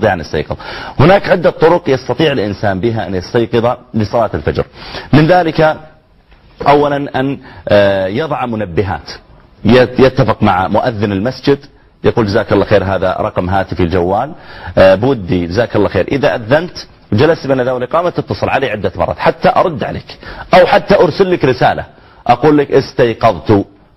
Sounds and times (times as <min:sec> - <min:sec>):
Speech: 0:00.0 - 0:05.9, 0:06.6 - 0:23.8.